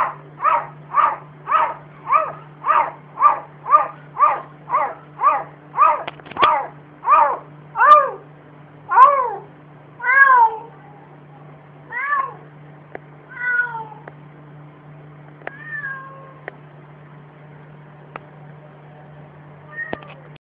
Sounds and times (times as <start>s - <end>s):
Meow: 10.0s - 11.0s, 11.9s - 12.4s, 13.3s - 14.1s, 15.5s - 16.5s, 19.7s - 20.3s.